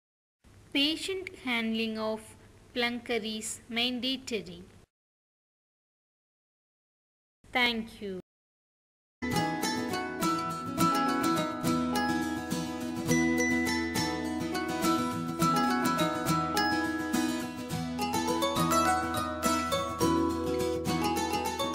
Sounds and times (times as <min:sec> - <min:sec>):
Mandolin: 0:09.3 - 0:21.7.